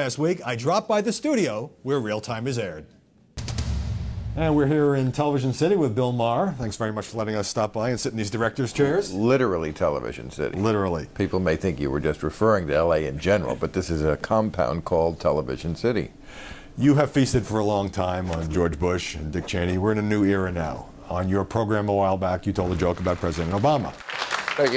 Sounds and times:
Male speech, man speaking: 0:00.0 - 0:02.9, 0:04.4 - 0:16.1, 0:16.8 - 0:24.7
Conversation: 0:00.0 - 0:24.7.

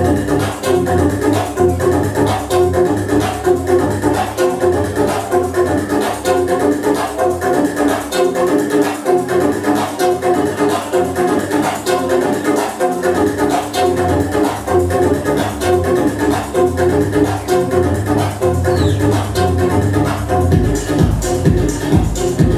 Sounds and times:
Music: 0:00.0 - 0:22.5.

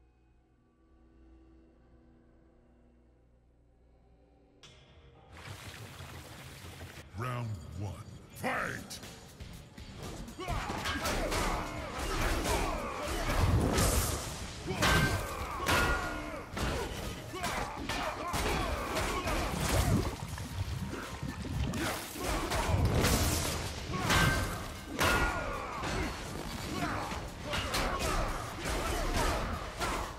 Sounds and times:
Music: 0:00.0 - 0:30.1
Speech: 0:07.0 - 0:09.0, 0:26.7 - 0:30.1.

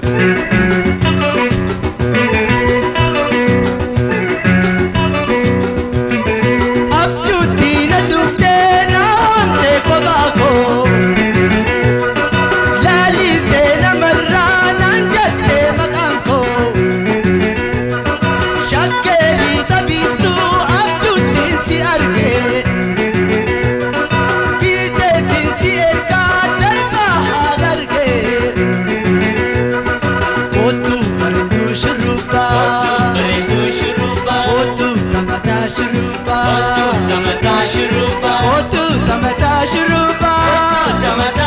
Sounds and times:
Music: 0:00.0 - 0:41.4.

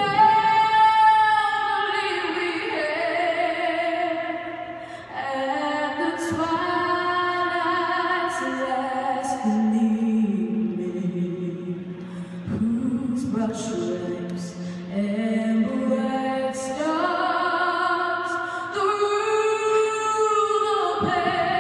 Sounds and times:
Female singing: 0:00.0 - 0:11.8, 0:12.4 - 0:21.6.

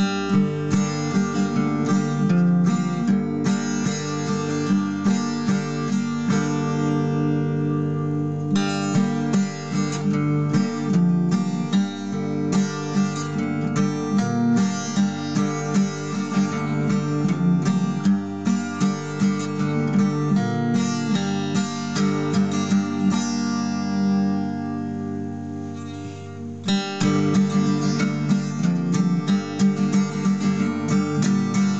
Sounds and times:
Acoustic guitar: 0:00.0 - 0:31.7.

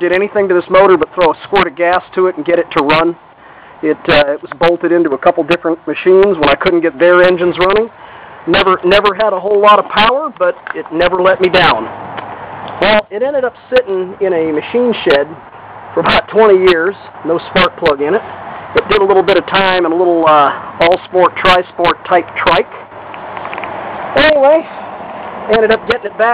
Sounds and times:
Speech: 0:00.0 - 0:03.2, 0:03.8 - 0:07.9, 0:08.5 - 0:11.9, 0:12.8 - 0:15.4, 0:16.0 - 0:18.2, 0:18.8 - 0:22.7, 0:24.2 - 0:24.8, 0:25.5 - 0:26.3.

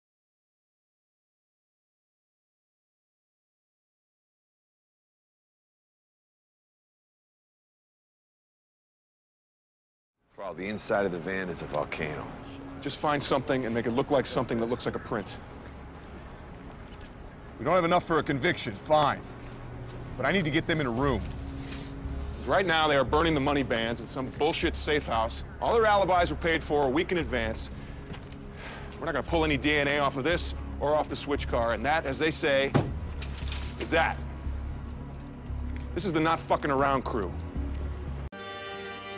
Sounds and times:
Music: 0:10.2 - 0:39.1
Speech: 0:10.4 - 0:15.4, 0:17.6 - 0:19.2, 0:20.2 - 0:21.3, 0:22.4 - 0:27.7, 0:29.0 - 0:32.8, 0:33.8 - 0:34.2, 0:36.0 - 0:37.4.

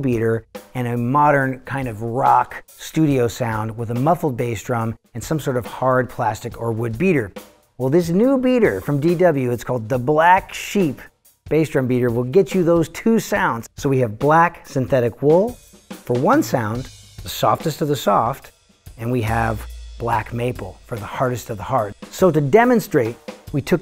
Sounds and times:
Music: 0:00.0 - 0:23.8
Speech: 0:00.0 - 0:23.8.

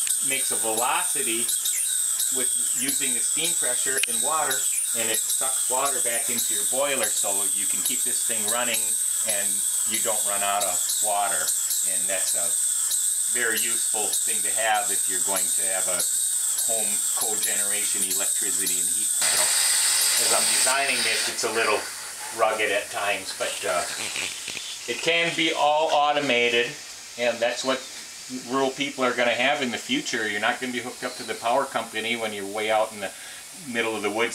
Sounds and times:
Speech: 0:00.2 - 0:01.5, 0:02.4 - 0:12.5, 0:13.3 - 0:16.0, 0:16.7 - 0:19.5, 0:20.2 - 0:24.0, 0:24.9 - 0:34.3.

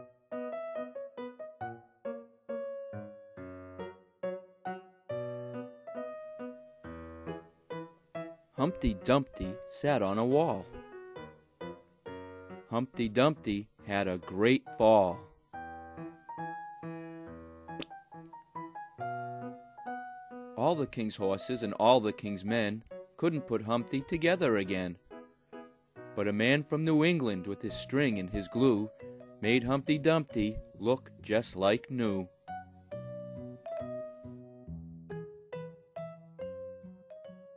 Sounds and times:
Music: 0:00.0 - 0:37.5
Speech: 0:08.6 - 0:10.7, 0:12.7 - 0:15.3, 0:20.6 - 0:25.0, 0:26.2 - 0:32.3.

